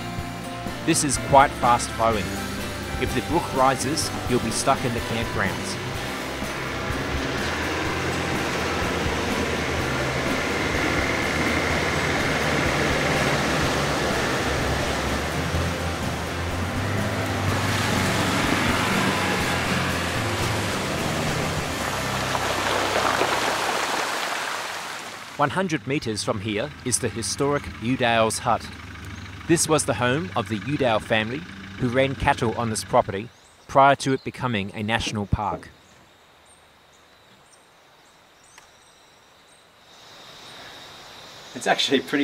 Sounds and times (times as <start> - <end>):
Wind: 0.0 - 42.2
Motorboat, speedboat: 3.1 - 24.5.